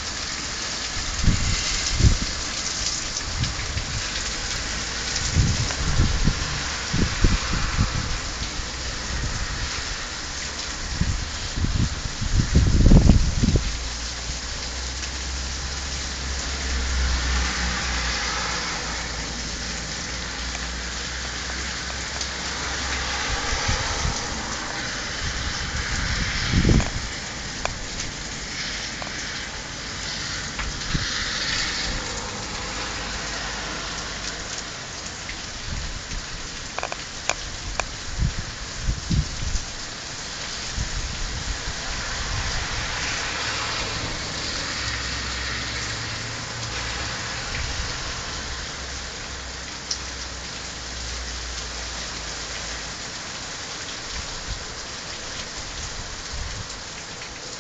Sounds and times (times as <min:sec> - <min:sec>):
Rain on surface: 0:00.0 - 0:57.6.